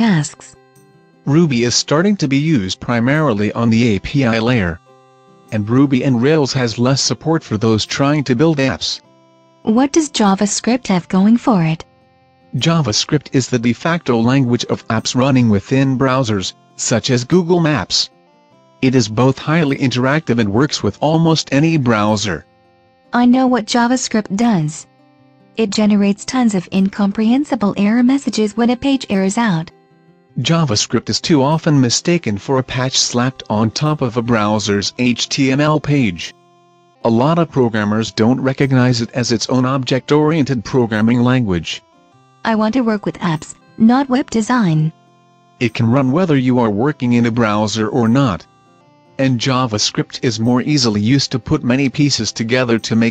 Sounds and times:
Speech: 0.0s - 0.6s, 1.3s - 4.8s, 5.5s - 9.0s, 9.7s - 11.8s, 12.6s - 18.1s, 18.8s - 22.4s, 23.2s - 24.9s, 25.6s - 29.7s, 30.4s - 36.4s, 37.0s - 41.9s, 42.5s - 45.0s, 45.6s - 48.5s, 49.2s - 53.1s
Music: 0.0s - 53.1s.

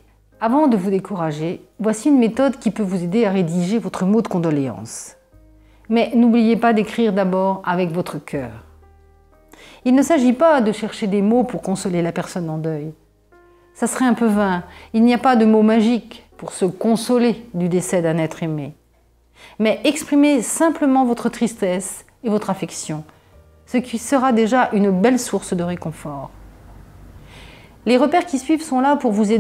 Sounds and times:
Music: 0.0s - 29.4s
Speech: 0.4s - 5.2s, 5.9s - 8.7s, 9.9s - 13.0s, 13.8s - 18.8s, 19.6s - 23.1s, 23.7s - 26.3s, 27.8s - 29.4s.

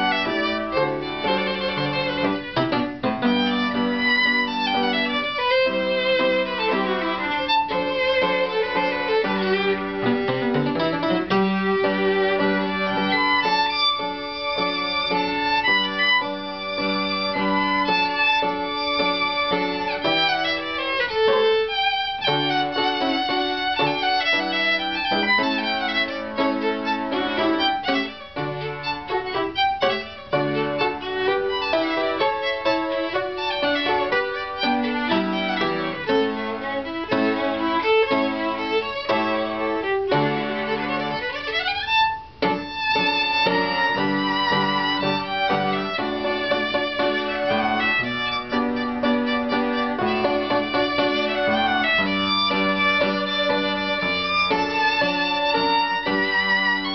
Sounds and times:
Violin, fiddle: 0.0s - 56.9s.

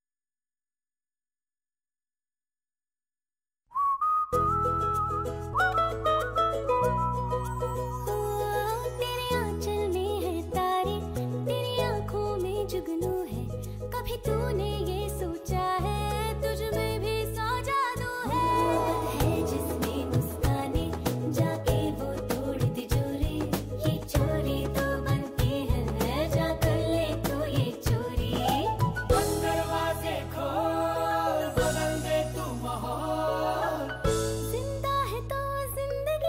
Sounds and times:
Music for children: 4.4s - 11.8s.

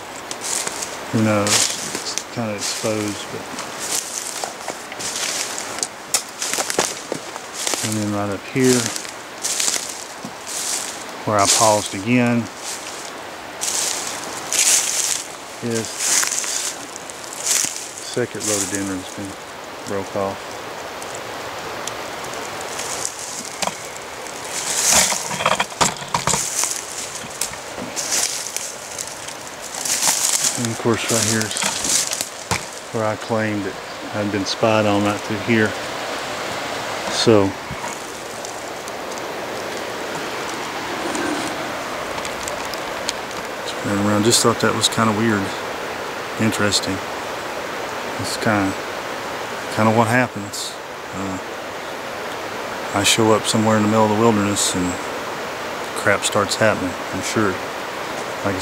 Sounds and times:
Waterfall: 0.0s - 58.6s
Speech: 1.1s - 3.4s, 7.8s - 9.0s, 11.2s - 12.5s, 15.6s - 16.1s, 18.0s - 20.4s, 30.5s - 31.7s, 32.9s - 35.8s, 37.1s - 37.6s, 43.6s - 45.6s, 46.4s - 47.0s, 48.2s - 48.8s, 49.7s - 51.4s, 52.9s - 55.0s, 56.0s - 57.6s.

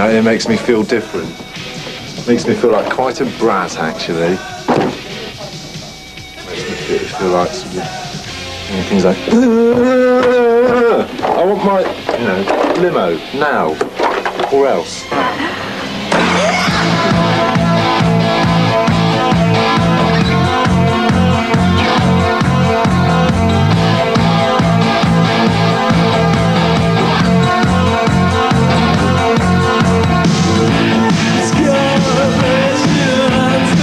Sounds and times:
Music: 0.0s - 33.8s.

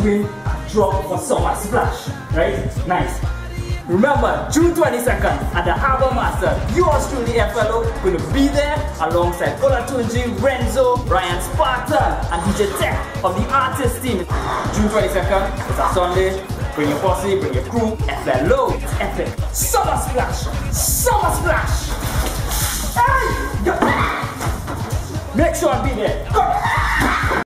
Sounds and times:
Speech: 0.0s - 3.3s, 3.9s - 21.9s, 25.3s - 26.6s
Music: 0.0s - 27.4s.

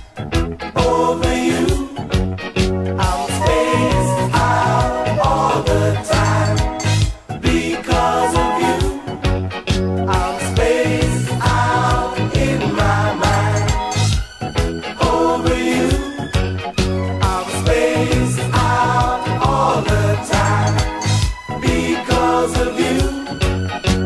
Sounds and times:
Music: 0.0s - 24.0s.

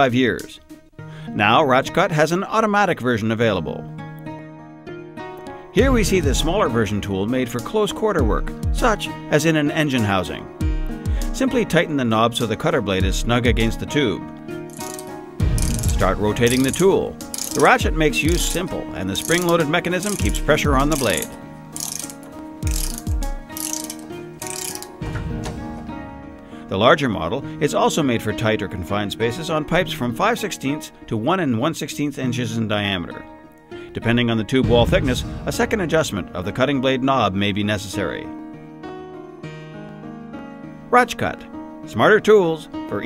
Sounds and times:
Speech: 0.0s - 0.6s, 1.4s - 3.8s, 5.8s - 10.5s, 11.4s - 14.2s, 15.9s - 21.3s, 26.7s - 33.2s, 34.0s - 38.3s, 40.9s - 43.0s
Music: 0.0s - 43.0s
Tools: 14.7s - 18.6s, 19.2s - 25.0s.

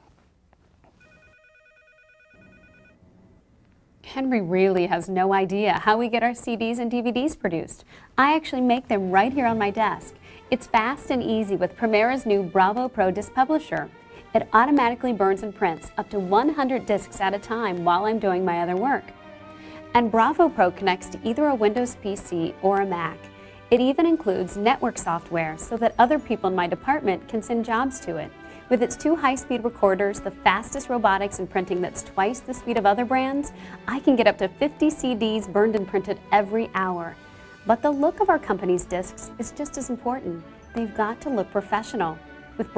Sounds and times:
Music: 0.9s - 42.7s
Speech: 4.0s - 19.1s, 20.0s - 42.7s.

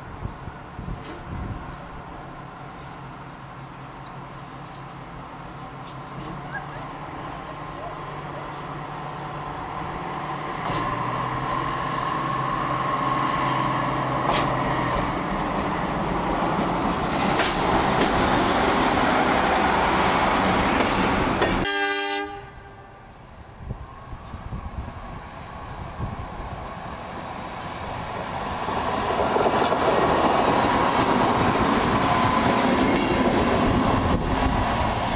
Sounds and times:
Train: 0.0s - 35.1s.

